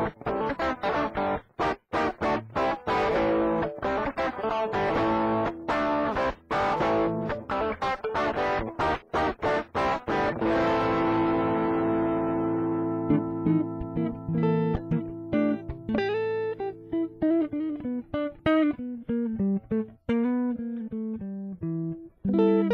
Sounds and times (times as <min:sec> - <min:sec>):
Bass guitar: 0:00.0 - 0:22.7.